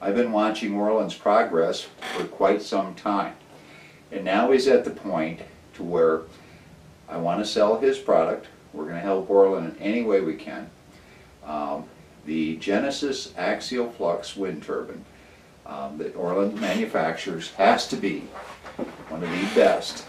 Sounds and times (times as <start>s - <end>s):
Speech: 0.0s - 3.4s, 4.1s - 6.3s, 7.1s - 10.8s, 11.4s - 18.4s, 19.0s - 20.0s.